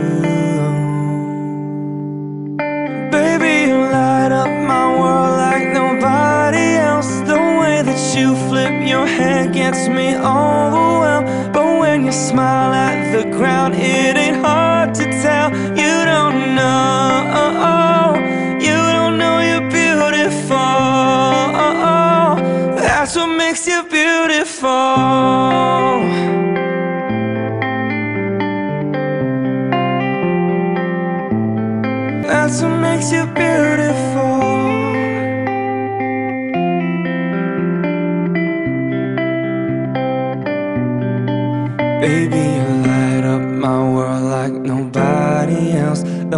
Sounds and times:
Music: 0:00.0 - 0:46.3.

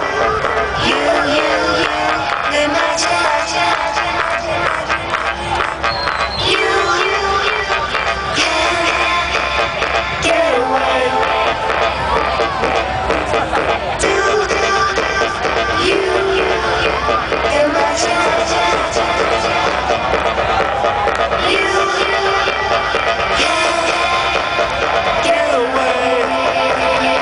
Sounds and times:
Exciting music: 0:00.0 - 0:27.2.

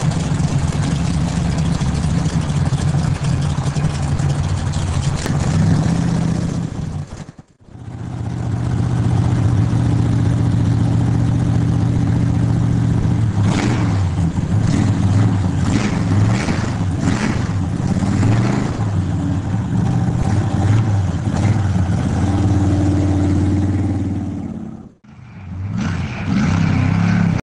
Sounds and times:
Vehicle: 0:00.0 - 0:27.4
Accelerating, revving, vroom: 0:13.4 - 0:19.0, 0:19.9 - 0:27.4.

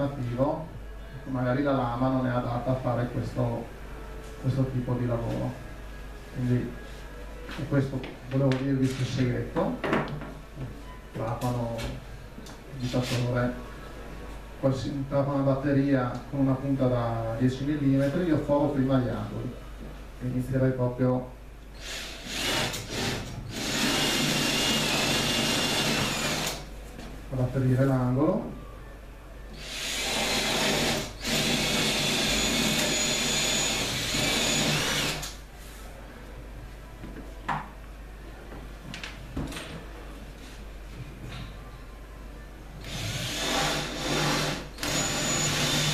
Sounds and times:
Speech: 0:07.5 - 0:09.8, 0:11.2 - 0:12.0, 0:12.7 - 0:13.6, 0:14.6 - 0:19.6, 0:20.2 - 0:21.4, 0:27.3 - 0:28.9.

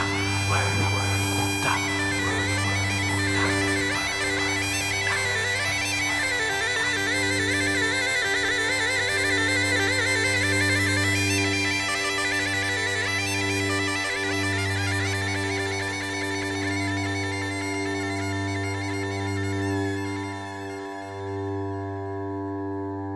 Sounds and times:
Bagpipes: 0:00.0 - 0:23.1
Wind instrument, woodwind instrument: 0:00.0 - 0:23.1.

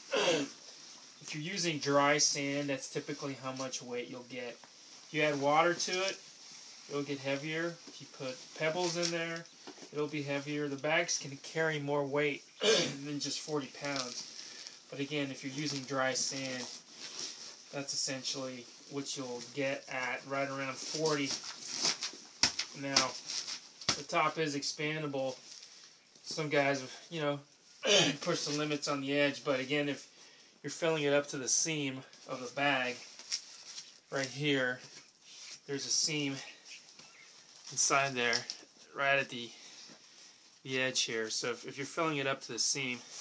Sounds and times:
Speech: 0:01.2 - 0:06.2, 0:06.9 - 0:14.3, 0:14.9 - 0:16.8, 0:17.7 - 0:21.4, 0:22.8 - 0:23.2, 0:24.0 - 0:25.4, 0:26.2 - 0:33.1, 0:34.1 - 0:34.9, 0:35.7 - 0:36.6, 0:37.7 - 0:39.6, 0:40.7 - 0:43.1.

